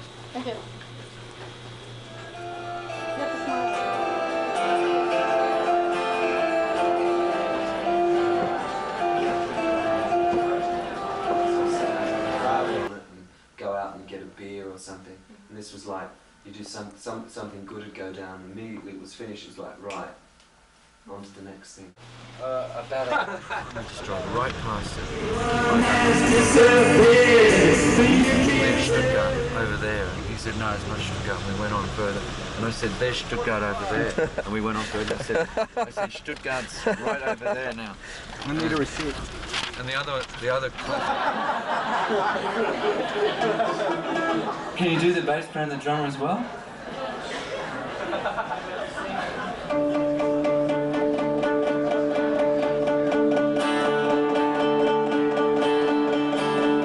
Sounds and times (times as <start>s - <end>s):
Music: 2.1s - 12.9s, 24.8s - 30.3s, 49.7s - 56.8s
Singing: 25.2s - 29.8s.